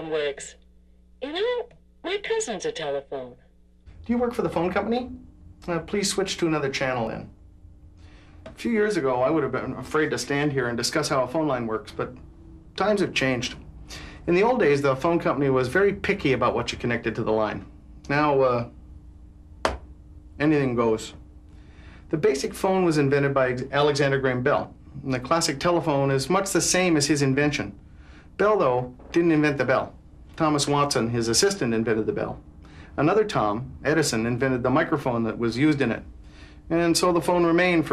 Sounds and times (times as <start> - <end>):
Speech: 0.0 - 0.6, 1.2 - 3.4, 4.1 - 7.4, 8.6 - 12.2, 12.8 - 13.6, 14.3 - 18.7, 20.4 - 21.2, 22.1 - 27.8, 28.4 - 32.4, 33.0 - 36.1, 36.7 - 37.9.